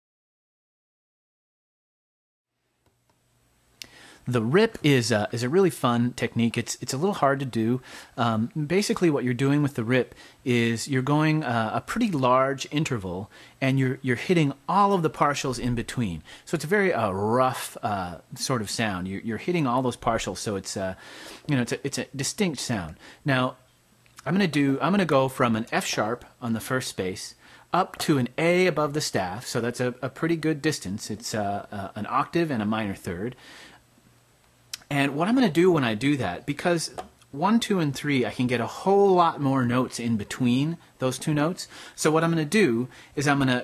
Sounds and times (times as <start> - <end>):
Speech: 4.2 - 33.4, 34.8 - 43.6.